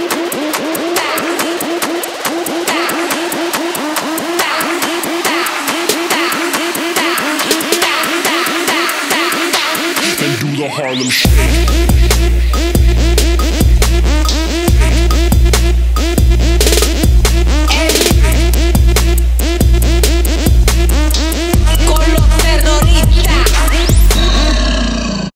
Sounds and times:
Music: 0.0 - 24.8.

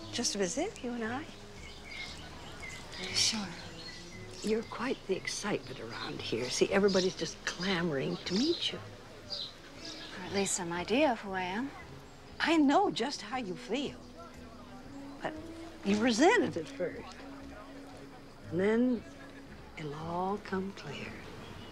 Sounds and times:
Music: 0.0 - 21.7
Speech: 4.4 - 8.8, 15.2 - 17.6, 18.4 - 21.2.

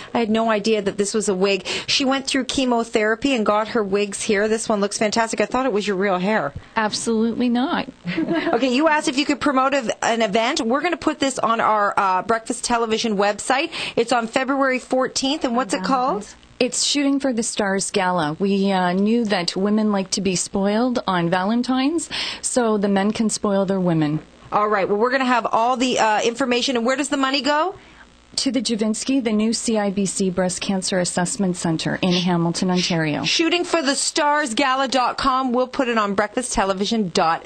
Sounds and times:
Speech: 0.1 - 27.8, 28.4 - 37.4.

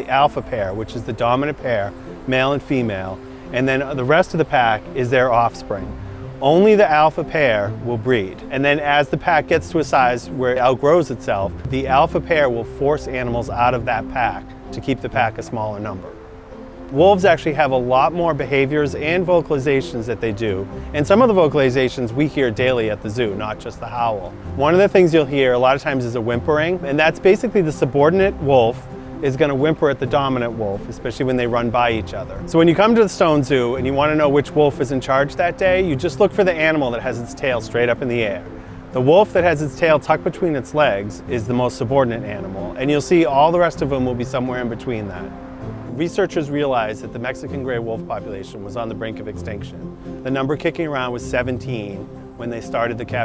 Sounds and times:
Speech: 0.0 - 16.2, 16.9 - 45.3, 45.9 - 53.2
Music: 0.0 - 53.2.

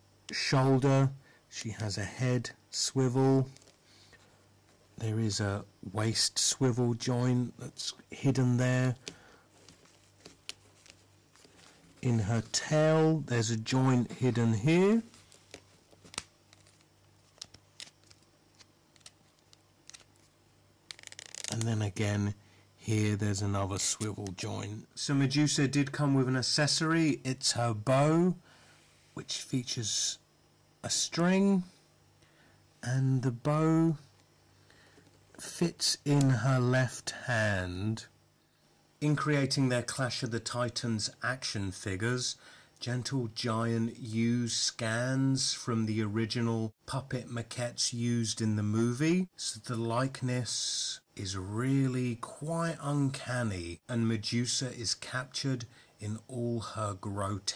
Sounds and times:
Speech: 0.3 - 3.6, 5.0 - 9.0, 12.0 - 15.2, 21.5 - 28.4, 29.2 - 30.2, 30.8 - 31.8, 32.8 - 34.1, 35.4 - 38.1, 39.0 - 57.5.

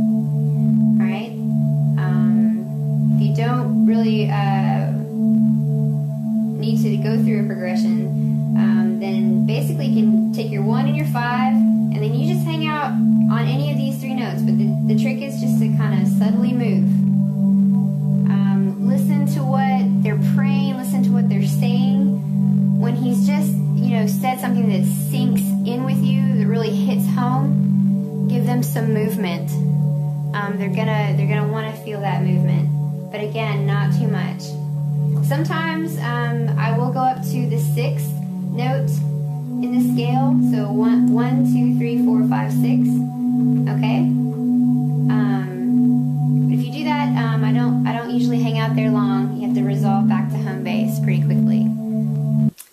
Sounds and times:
Speech: 1.0 - 1.4, 2.0 - 2.6, 3.2 - 5.0, 6.6 - 17.0, 18.3 - 22.2, 22.8 - 27.6, 28.3 - 29.7, 30.4 - 34.6, 35.2 - 39.0, 39.6 - 43.0, 43.6 - 44.2, 45.1 - 45.8, 46.5 - 51.8.

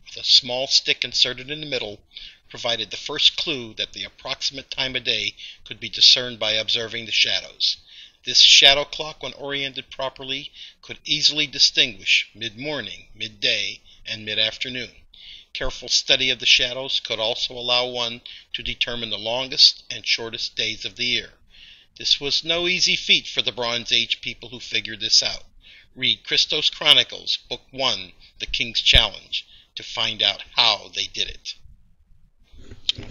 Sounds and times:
Speech: 0.1 - 15.0, 15.6 - 21.4, 22.0 - 31.6, 32.6 - 33.1.

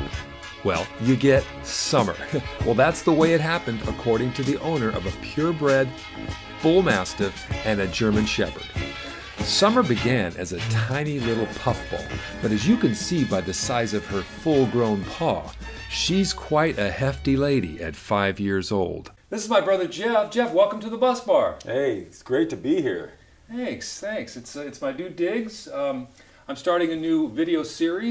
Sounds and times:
Music: 0.0 - 18.0
Speech: 0.6 - 5.9, 6.6 - 8.7, 9.4 - 28.1.

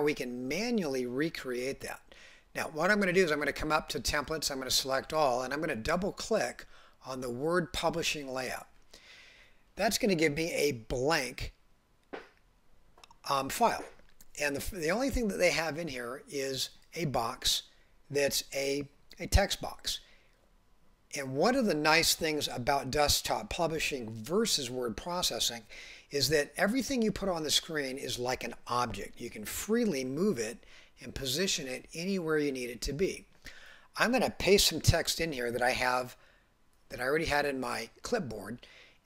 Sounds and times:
Speech: 0.0 - 2.0, 2.6 - 8.7, 9.8 - 11.6, 13.2 - 20.0, 21.1 - 33.3, 34.0 - 36.2, 36.9 - 38.6.

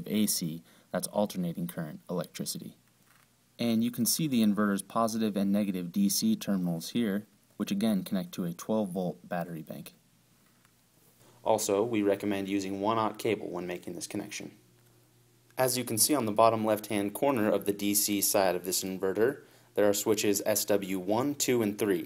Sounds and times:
Speech: 0.0 - 2.8, 3.6 - 10.0, 11.4 - 14.6, 15.6 - 22.0.

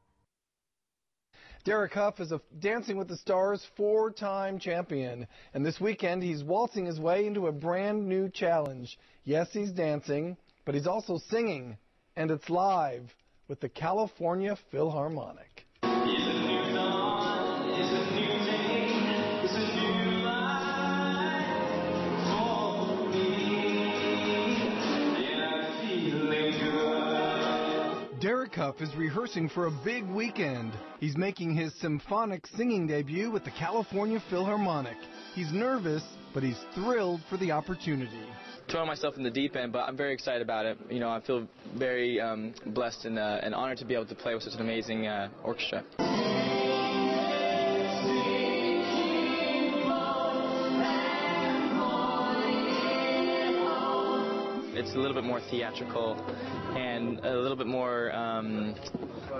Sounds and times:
Speech: 1.6 - 15.6, 28.2 - 46.0, 54.8 - 59.4
Music: 15.8 - 39.1, 46.0 - 59.4.

